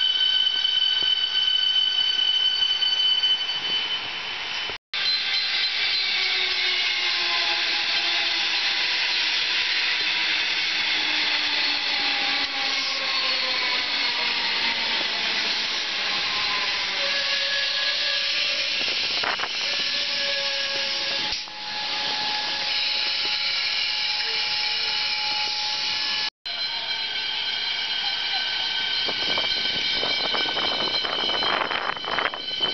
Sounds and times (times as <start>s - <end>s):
Railroad car, train wagon: 0.0s - 32.7s
Train: 0.0s - 32.7s.